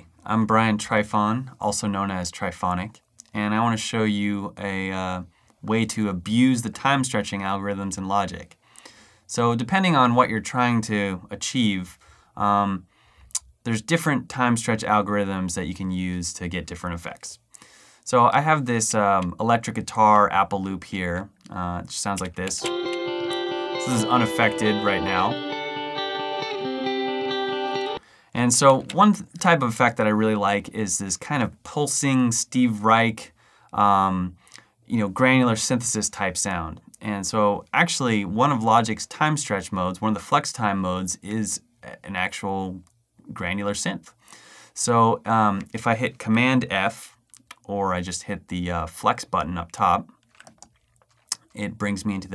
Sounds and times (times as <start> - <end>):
Speech: 0.0 - 8.6, 9.3 - 17.5, 18.1 - 22.7, 23.8 - 25.4, 28.4 - 44.2, 44.8 - 50.2, 51.3 - 52.3.